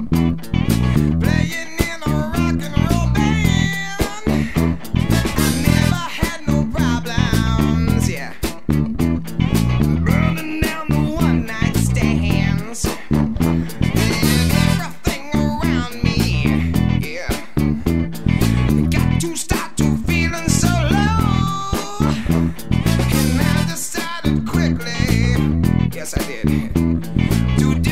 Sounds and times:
Dance music: 2.9s - 6.5s, 9.5s - 17.3s, 21.4s - 24.3s.

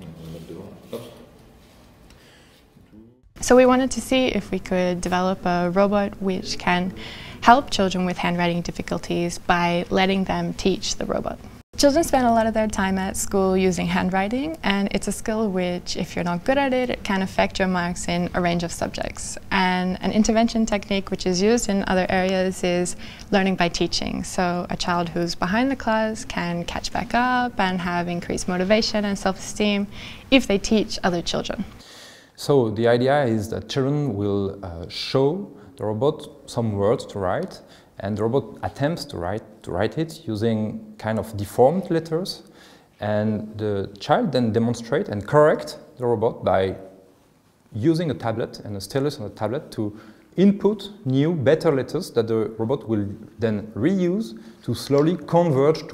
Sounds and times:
Speech: 0.0s - 1.3s, 3.0s - 31.6s, 32.4s - 46.9s, 47.8s - 55.9s
Inside, small room: 0.0s - 55.9s.

